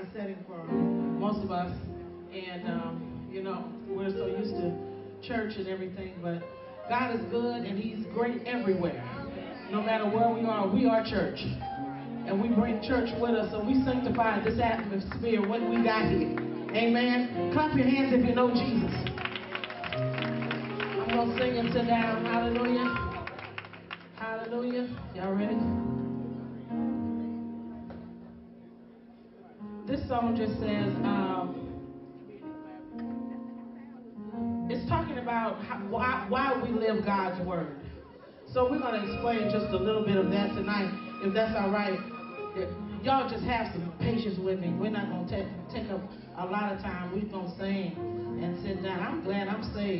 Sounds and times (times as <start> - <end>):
Speech: 0.0 - 11.6, 34.7 - 37.8, 38.5 - 49.9
Music: 0.0 - 49.9.